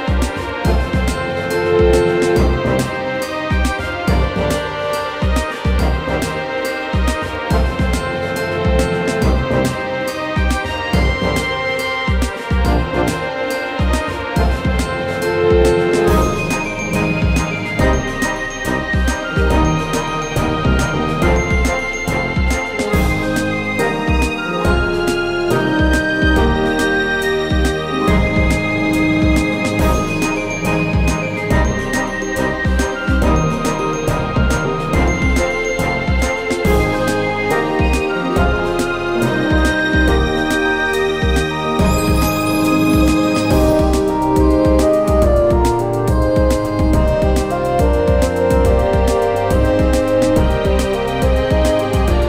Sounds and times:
Music: 0.0 - 52.2.

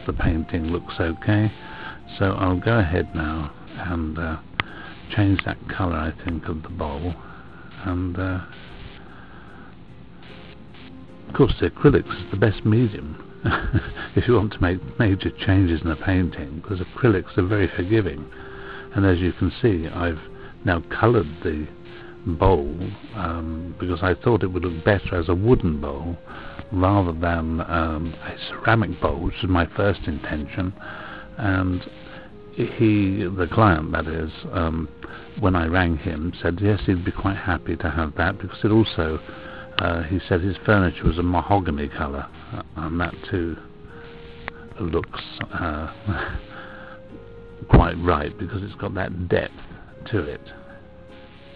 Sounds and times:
Speech: 0.0 - 4.4, 5.1 - 7.2, 7.8 - 8.6, 11.3 - 13.2, 14.2 - 18.3, 18.9 - 30.8, 31.4 - 32.0, 32.6 - 43.6, 44.7 - 46.4, 47.6 - 50.6
Music: 0.0 - 51.5.

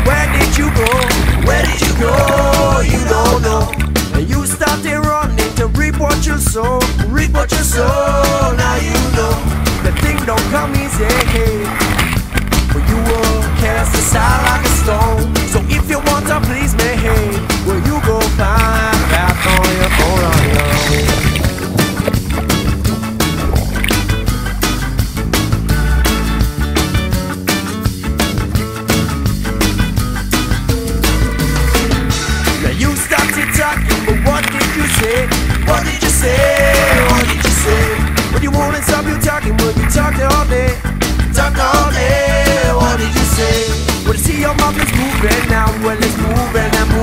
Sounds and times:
Boat, Water vehicle: 0.0 - 47.0
Music: 0.0 - 47.0.

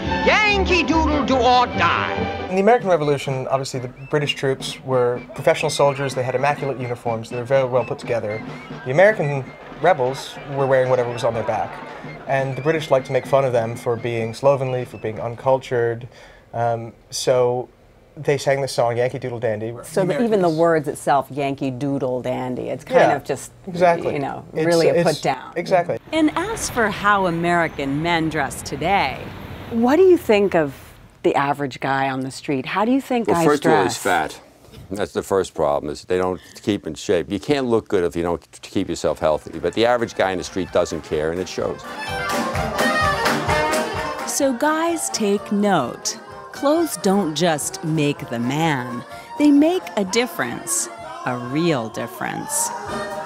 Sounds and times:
Outside, urban or manmade: 26.0 - 31.5.

